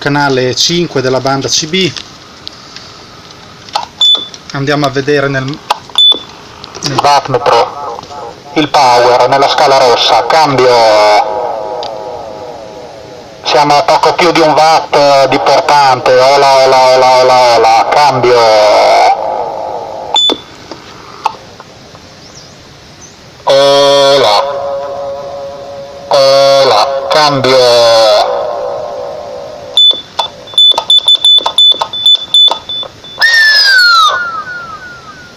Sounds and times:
Speech: 0.0 - 2.0, 4.5 - 5.6, 6.8 - 11.4, 13.4 - 19.2, 23.5 - 24.6, 26.1 - 28.6.

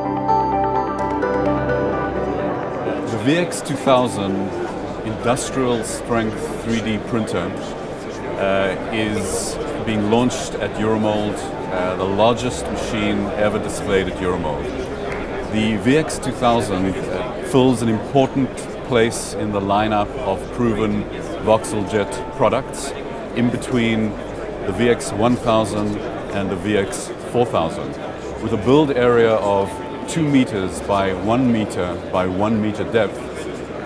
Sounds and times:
Music: 0.0 - 26.4, 28.4 - 32.0
Speech: 2.9 - 33.8.

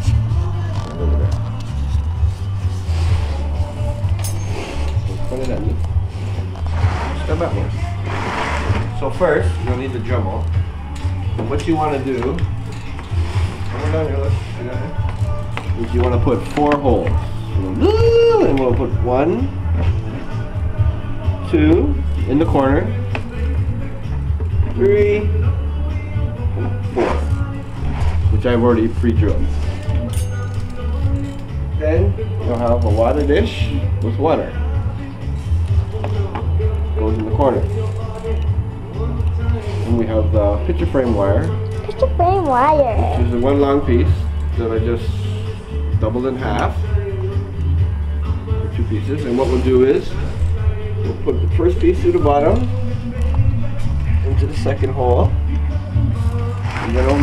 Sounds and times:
Music: 0.0 - 57.2.

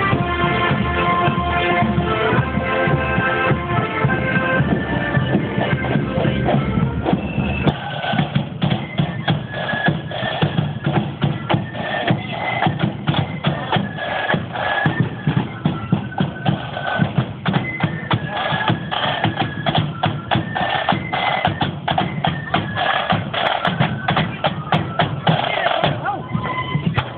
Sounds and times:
Music: 0.0 - 27.1
Speech: 25.2 - 27.0.

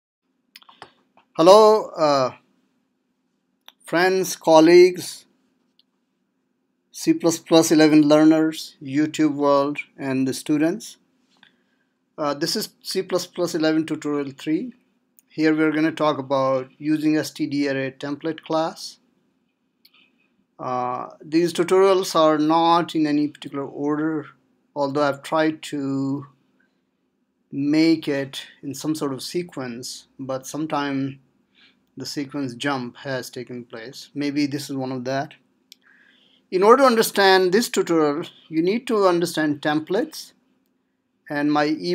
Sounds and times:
Inside, small room: 0.2 - 41.9
Speech: 1.4 - 2.4, 3.7 - 5.3, 7.0 - 11.0, 12.2 - 19.0, 20.6 - 26.3, 27.5 - 31.2, 32.0 - 35.4, 36.5 - 40.4, 41.3 - 41.9.

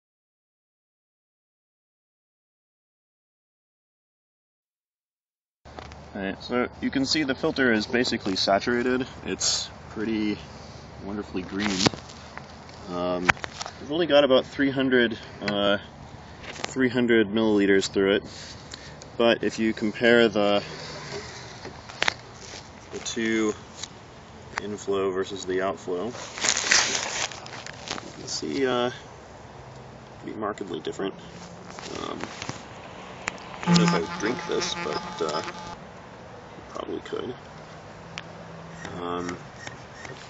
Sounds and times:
Outside, rural or natural: 5.7 - 40.2
Speech: 6.1 - 11.9, 12.8 - 15.9, 16.7 - 18.3, 19.2 - 20.7, 23.0 - 23.6, 24.6 - 26.2, 28.2 - 29.1, 30.2 - 32.3, 33.7 - 35.6, 36.7 - 37.4, 38.8 - 39.5.

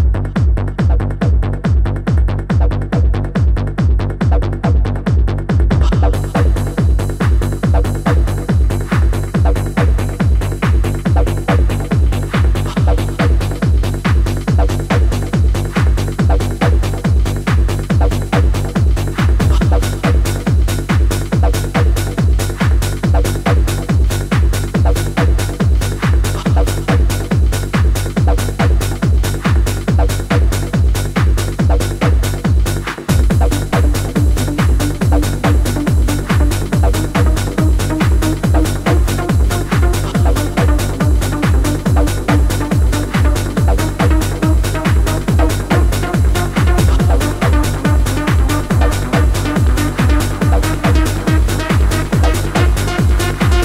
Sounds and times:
Music: 0.0 - 53.6.

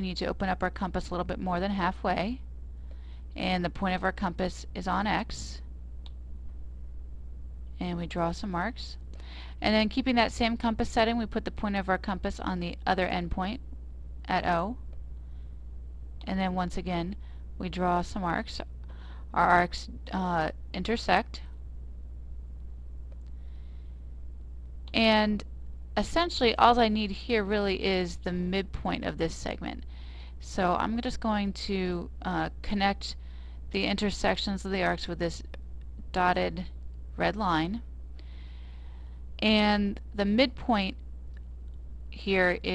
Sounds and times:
Speech: 0.0 - 2.4, 3.4 - 5.6, 7.8 - 9.0, 9.6 - 13.6, 14.3 - 14.8, 16.2 - 18.7, 19.3 - 21.5, 24.9 - 25.4, 26.0 - 37.9, 39.4 - 41.0, 42.2 - 42.7.

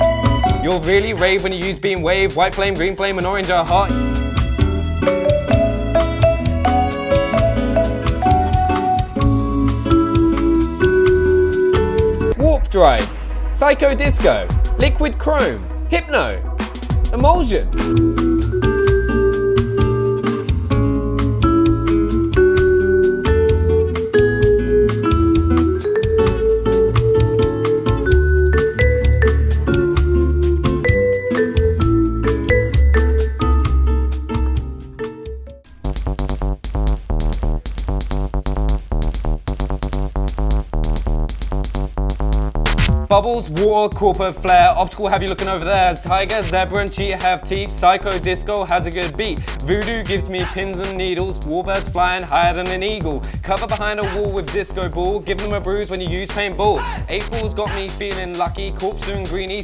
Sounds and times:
Music: 0.0 - 59.6
Speech: 0.6 - 4.0, 12.4 - 16.4, 17.1 - 17.8, 43.1 - 59.6.

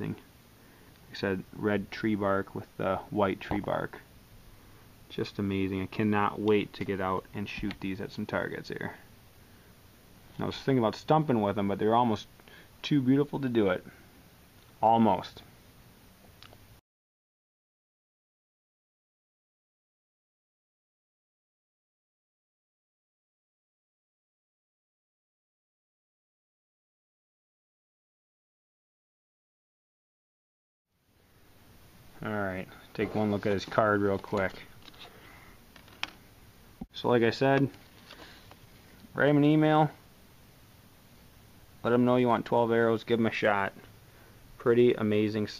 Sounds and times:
Speech: 0.0 - 0.3, 1.1 - 4.1, 5.1 - 9.1, 10.4 - 14.0, 14.8 - 15.5, 32.2 - 34.7, 36.9 - 37.8, 39.1 - 40.0, 41.8 - 43.9, 44.6 - 45.5.

